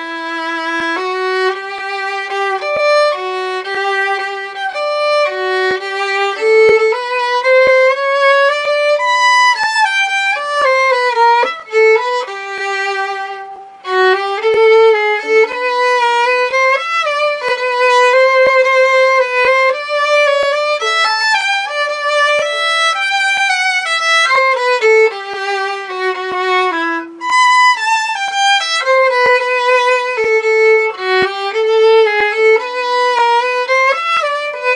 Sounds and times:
Violin, fiddle: 0.0s - 34.7s.

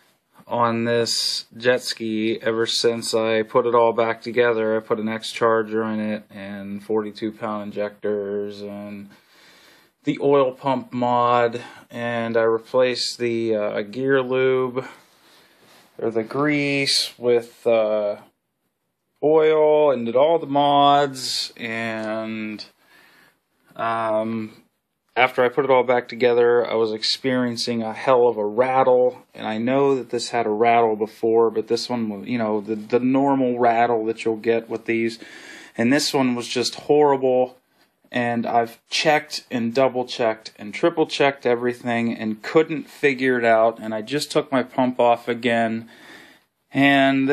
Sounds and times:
Speech: 0.4s - 9.2s, 10.0s - 15.0s, 16.0s - 18.4s, 19.2s - 22.8s, 23.8s - 45.9s, 46.7s - 47.3s.

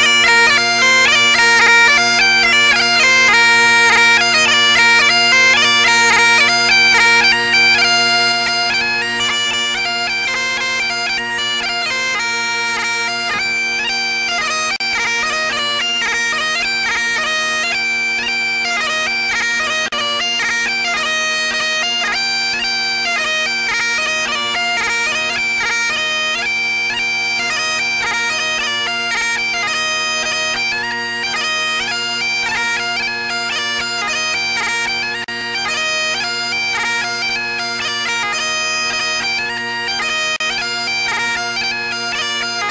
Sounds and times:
Bagpipes: 0.0s - 42.7s.

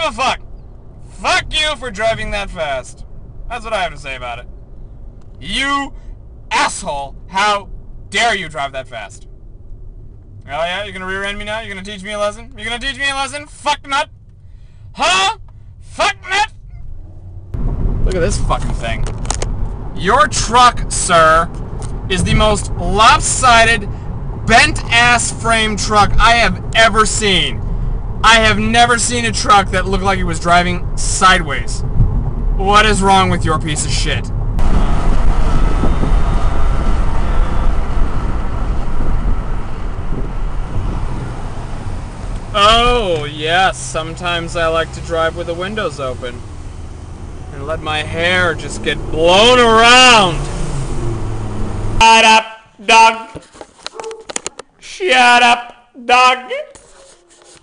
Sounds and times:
Speech: 0.0s - 0.4s, 1.2s - 4.5s, 5.4s - 5.9s, 6.5s - 9.2s, 10.5s - 14.1s, 15.0s - 16.5s, 18.0s - 19.1s, 20.0s - 21.5s, 22.1s - 23.9s, 24.5s - 27.6s, 28.2s - 31.8s, 32.6s - 34.3s, 42.6s - 46.4s, 47.5s - 50.4s, 52.0s - 53.4s, 54.8s - 57.0s
Car: 0.0s - 57.6s.

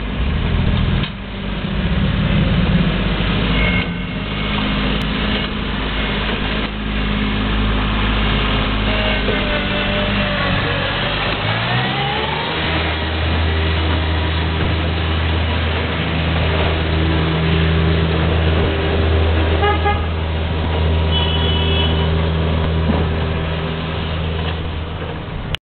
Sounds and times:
Vehicle: 0.0s - 25.6s.

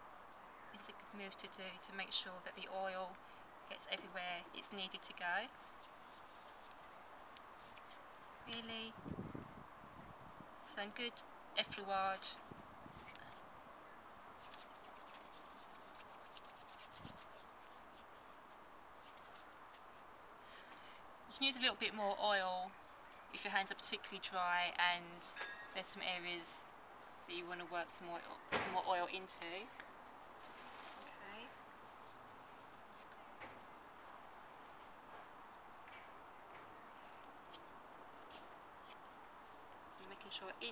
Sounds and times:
Speech: 0.8s - 5.5s, 8.5s - 9.0s, 10.7s - 12.4s, 21.3s - 22.7s, 23.4s - 26.6s, 27.3s - 29.8s, 40.0s - 40.7s.

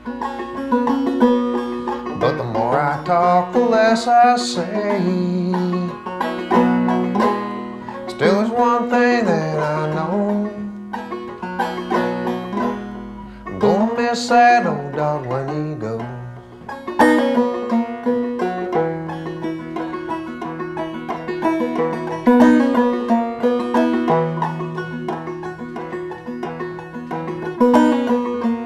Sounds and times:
Music: 0.0s - 28.6s.

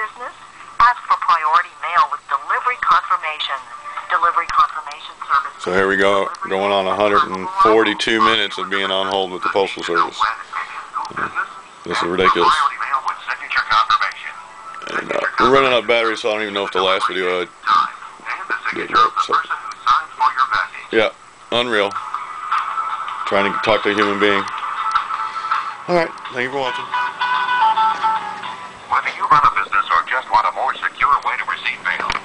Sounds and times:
Radio: 0.0s - 27.0s, 28.9s - 32.2s
Speech: 4.2s - 22.0s.

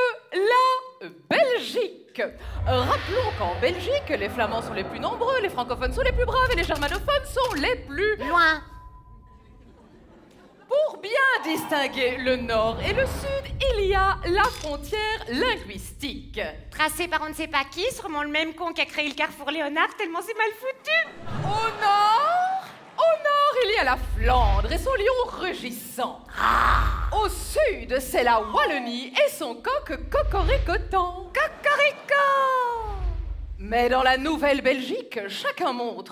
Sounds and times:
Speech: 0.0s - 8.7s, 10.7s - 36.1s.

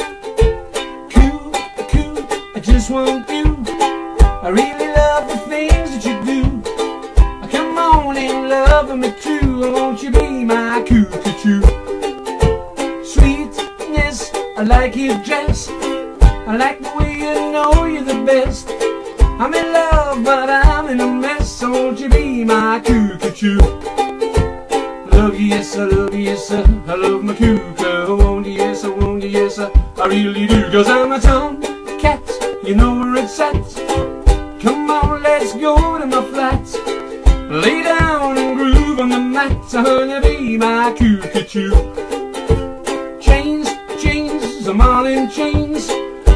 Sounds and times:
Music: 0.0s - 46.3s.

